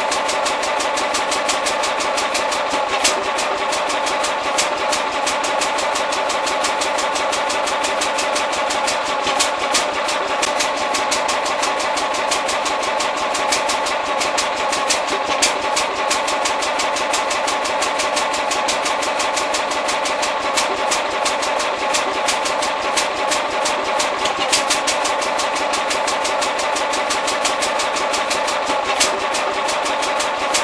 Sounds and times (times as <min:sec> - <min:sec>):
Medium engine (mid frequency): 0:00.0 - 0:30.6.